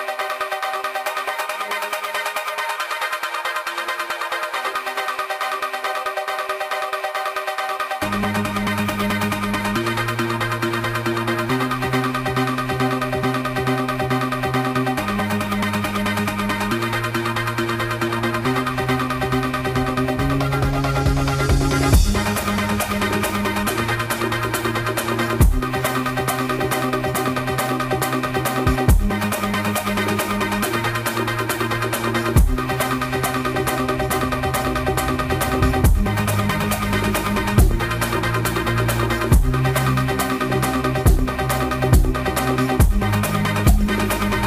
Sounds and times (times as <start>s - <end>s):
Dubstep: 0.0s - 44.4s.